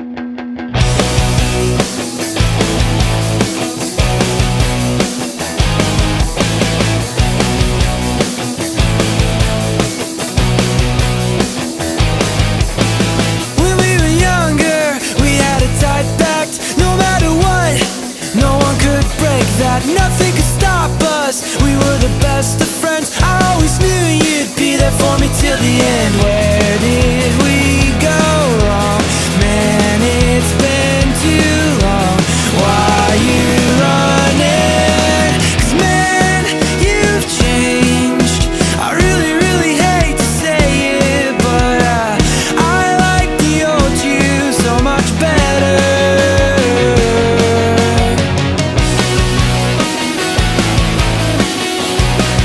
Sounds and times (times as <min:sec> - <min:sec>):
Grunge: 0:00.0 - 0:52.4.